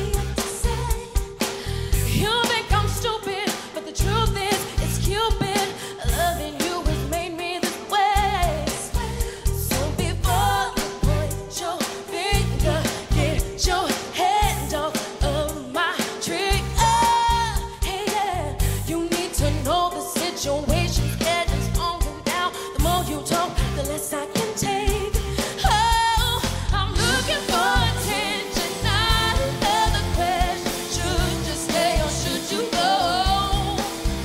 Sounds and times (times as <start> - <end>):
Music: 0.0 - 34.2.